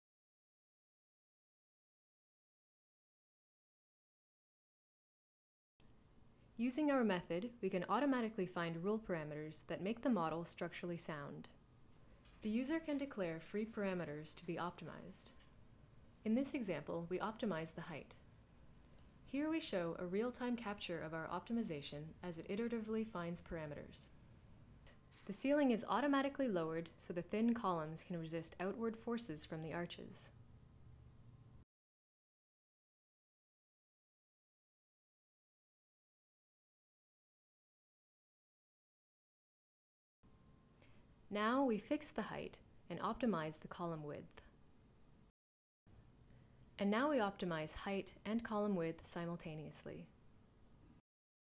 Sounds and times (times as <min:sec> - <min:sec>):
Speech: 0:06.6 - 0:11.6, 0:12.4 - 0:15.4, 0:16.2 - 0:18.2, 0:19.3 - 0:24.2, 0:24.9 - 0:30.4, 0:41.3 - 0:44.6, 0:46.8 - 0:50.1.